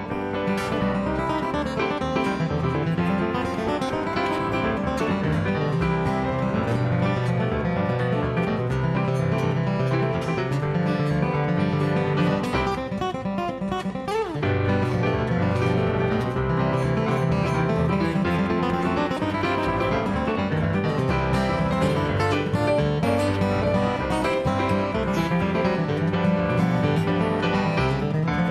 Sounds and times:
Acoustic guitar: 0:00.0 - 0:28.5.

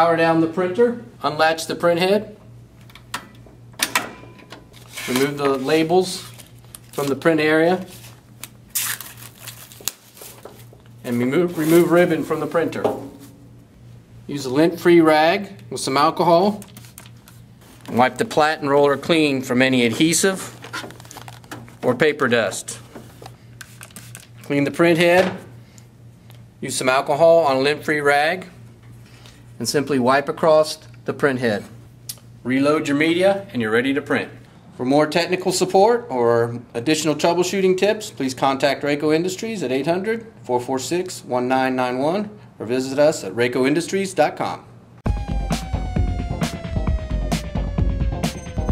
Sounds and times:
Speech: 0:00.0 - 0:02.4, 0:05.0 - 0:06.3, 0:07.0 - 0:07.9, 0:11.0 - 0:13.1, 0:14.3 - 0:16.6, 0:17.9 - 0:20.6, 0:21.8 - 0:22.9, 0:24.5 - 0:25.4, 0:26.6 - 0:28.6, 0:29.6 - 0:31.8, 0:32.4 - 0:44.7.

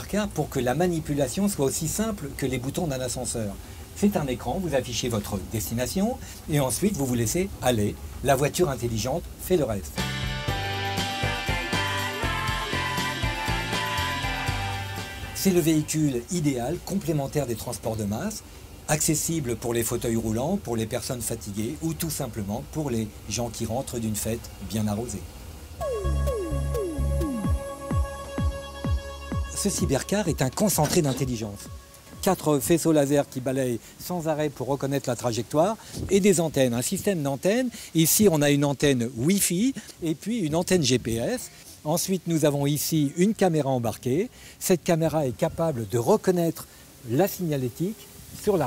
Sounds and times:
Speech: 0:00.0 - 0:10.0, 0:15.4 - 0:25.3, 0:29.6 - 0:48.6
Music: 0:10.0 - 0:16.2, 0:25.8 - 0:33.2.

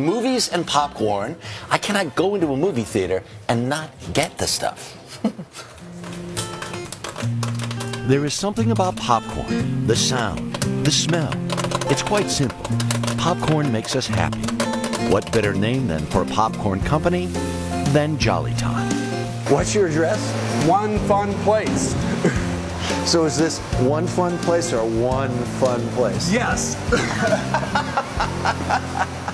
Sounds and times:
Speech: 0:00.0 - 0:04.9, 0:08.1 - 0:12.6, 0:13.2 - 0:14.3, 0:15.1 - 0:17.3, 0:19.5 - 0:21.9, 0:23.0 - 0:26.8.

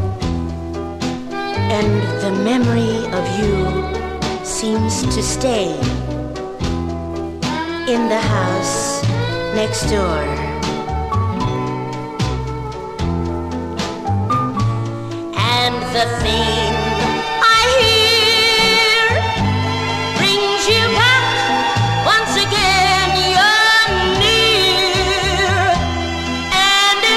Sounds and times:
Speech: 0:01.7 - 0:03.8, 0:04.5 - 0:06.0, 0:07.9 - 0:10.4
House music: 0:15.4 - 0:27.1.

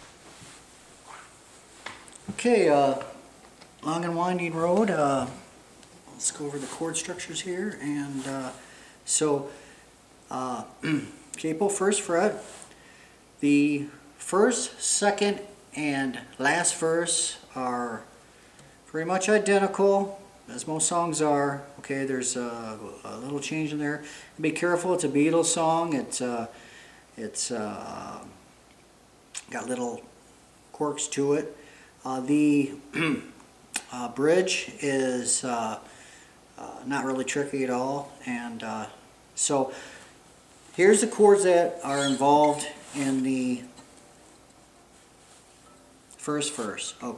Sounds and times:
Speech: 0:02.3 - 0:03.2, 0:03.8 - 0:05.5, 0:06.1 - 0:09.6, 0:10.3 - 0:12.5, 0:13.4 - 0:18.1, 0:18.9 - 0:26.6, 0:27.2 - 0:28.4, 0:29.4 - 0:30.1, 0:30.7 - 0:35.9, 0:36.6 - 0:39.8, 0:40.8 - 0:43.7, 0:46.2 - 0:47.1.

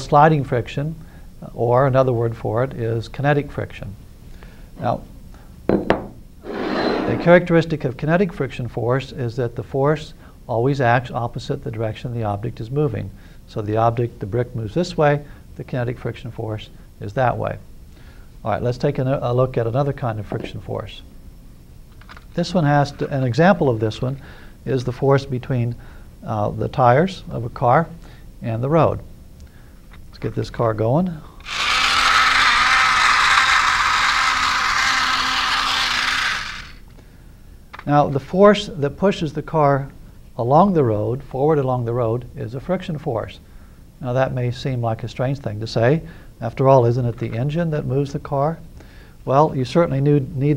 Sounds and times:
Speech: 0:00.0 - 0:04.0, 0:04.8 - 0:05.1, 0:07.1 - 0:17.6, 0:18.4 - 0:21.1, 0:22.4 - 0:29.1, 0:30.1 - 0:31.3, 0:37.8 - 0:43.4, 0:44.0 - 0:48.6, 0:49.2 - 0:50.5.

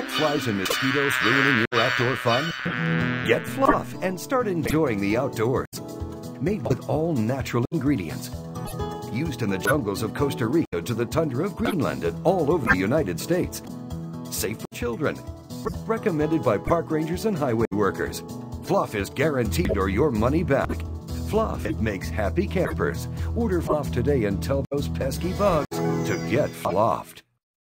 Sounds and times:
Speech: 0:00.0 - 0:02.6, 0:03.3 - 0:05.8, 0:06.4 - 0:08.4, 0:09.1 - 0:13.7, 0:14.3 - 0:27.3
Music: 0:00.0 - 0:27.3.

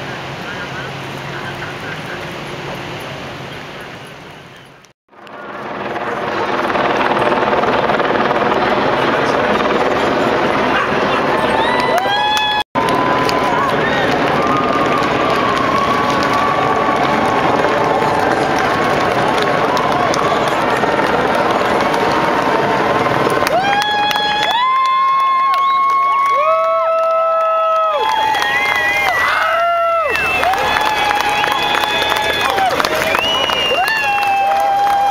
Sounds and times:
Outside, urban or manmade: 0:00.0 - 0:35.1
Run: 0:10.7 - 0:35.1.

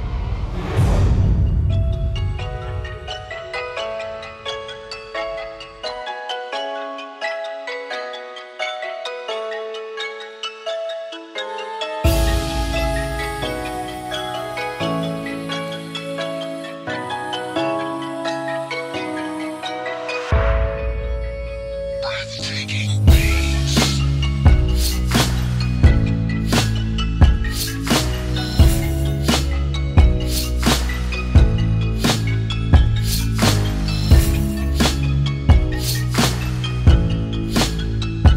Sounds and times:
Music: 0:00.0 - 0:38.3.

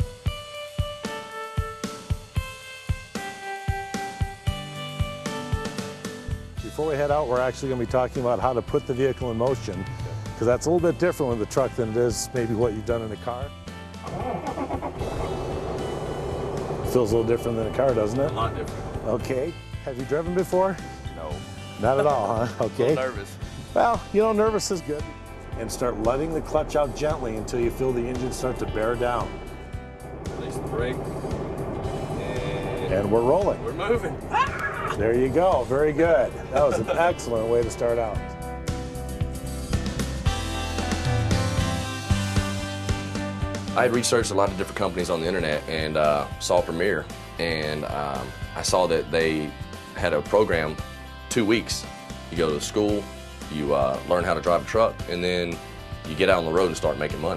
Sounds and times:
Music: 0:00.0 - 0:57.3
Speech: 0:06.6 - 0:09.8, 0:10.4 - 0:13.5, 0:16.9 - 0:25.0, 0:25.6 - 0:29.3, 0:30.4 - 0:31.0, 0:32.2 - 0:34.1, 0:34.9 - 0:38.2, 0:43.8 - 0:57.3
Truck: 0:14.8 - 0:19.0, 0:29.3 - 0:35.0.

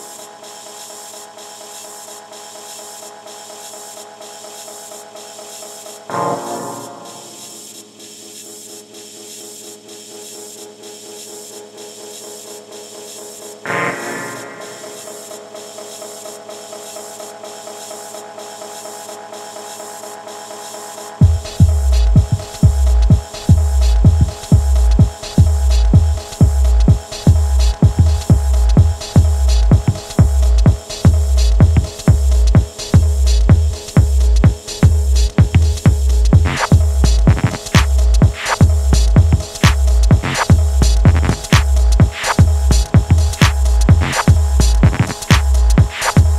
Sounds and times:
Music: 0:00.0 - 0:46.3.

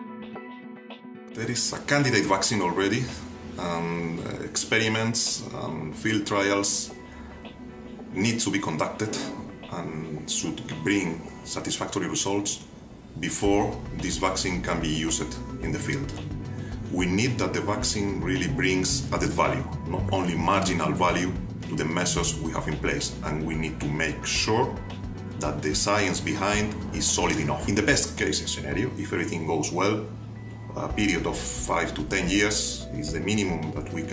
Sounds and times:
Music: 0:00.0 - 0:34.1
Speech: 0:01.4 - 0:07.0, 0:08.1 - 0:16.2, 0:16.9 - 0:24.8, 0:25.4 - 0:30.1, 0:30.8 - 0:34.1.

